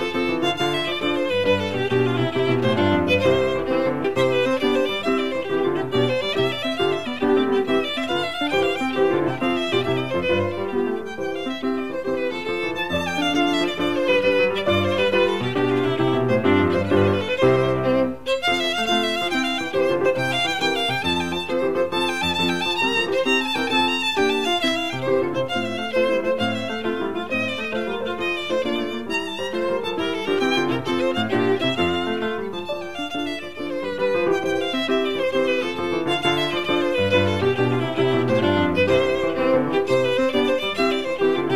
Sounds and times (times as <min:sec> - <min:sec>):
Violin, fiddle: 0:00.0 - 0:41.5.